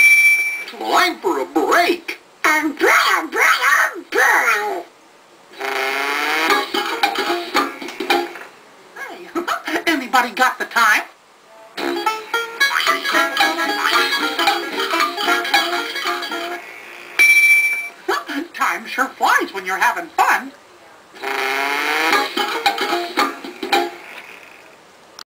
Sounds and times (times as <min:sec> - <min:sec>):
Speech: 0:00.7 - 0:04.9, 0:09.0 - 0:11.8, 0:18.1 - 0:21.1
Music: 0:06.3 - 0:08.4, 0:11.8 - 0:16.6, 0:22.0 - 0:24.0.